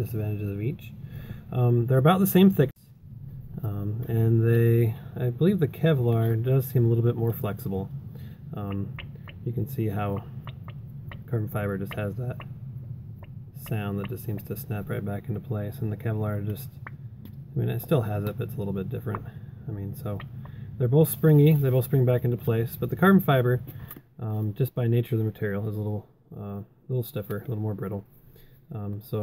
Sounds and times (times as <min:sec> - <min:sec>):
Speech: 0:00.0 - 0:02.8, 0:03.6 - 0:07.9, 0:08.5 - 0:10.3, 0:11.3 - 0:12.4, 0:13.6 - 0:16.8, 0:17.6 - 0:28.1, 0:28.7 - 0:29.2.